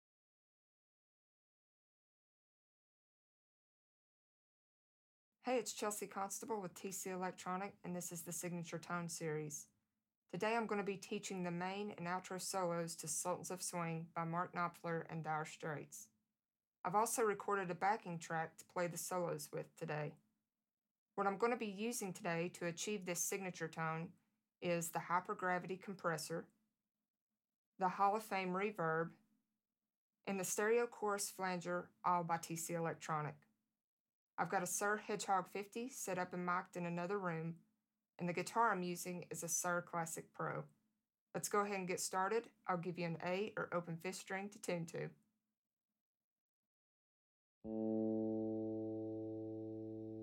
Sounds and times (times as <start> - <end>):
Speech: 5.4 - 9.7, 10.4 - 16.1, 16.9 - 20.2, 21.2 - 26.5, 27.8 - 29.1, 30.3 - 33.4, 34.4 - 37.6, 38.2 - 40.7, 41.4 - 45.2.